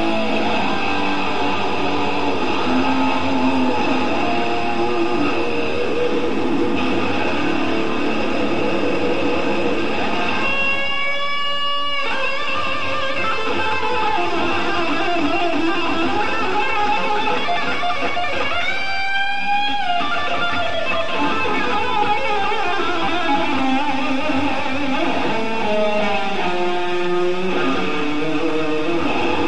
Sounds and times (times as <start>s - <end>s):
Electric guitar: 0.0s - 29.4s.